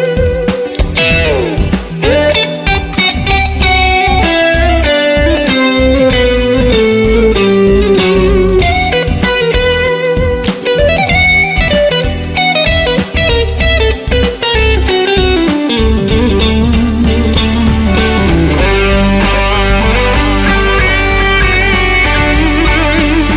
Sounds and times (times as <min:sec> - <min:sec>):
Guitar: 0:00.0 - 0:23.3.